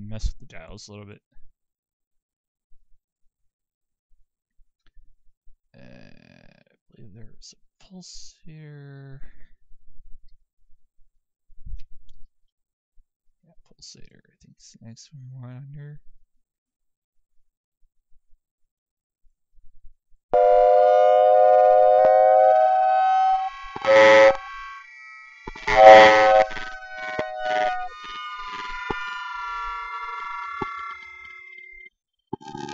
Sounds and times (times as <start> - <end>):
Noise: 20.4 - 32.7.